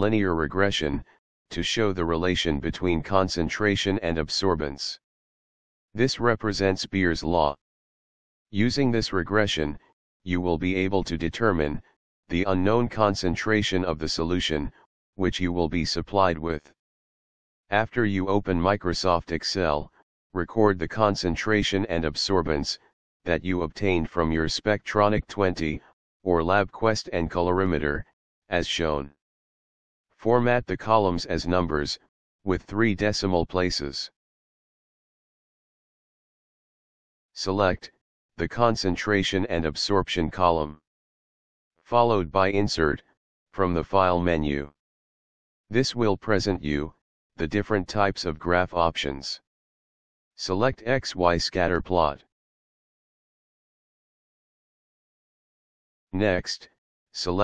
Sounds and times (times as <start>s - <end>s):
Speech synthesizer: 0.0s - 5.0s, 6.0s - 7.6s, 8.6s - 16.8s, 17.7s - 29.2s, 30.2s - 34.2s, 37.4s - 40.8s, 41.8s - 44.8s, 45.7s - 49.4s, 50.4s - 52.3s, 56.2s - 57.4s.